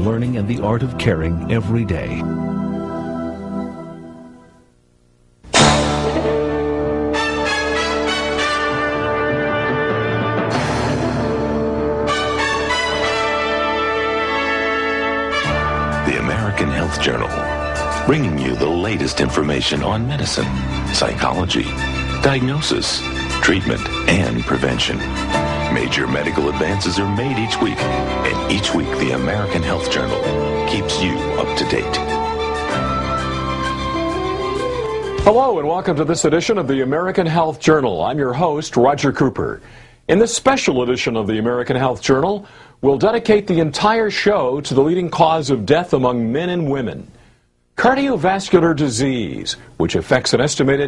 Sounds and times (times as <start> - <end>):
Speech: 0.0 - 2.3, 16.1 - 17.4, 18.1 - 25.0, 25.7 - 32.1, 35.2 - 47.1, 47.8 - 50.8
Music: 0.0 - 4.8, 5.5 - 37.5.